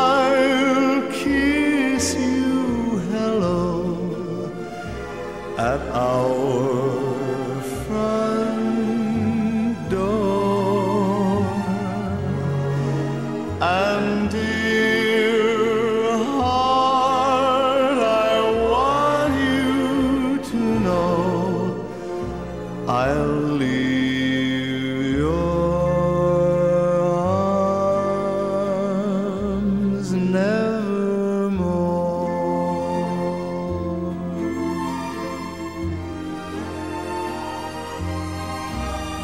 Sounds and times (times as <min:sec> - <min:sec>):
Vocal music: 0:00.0 - 0:39.2.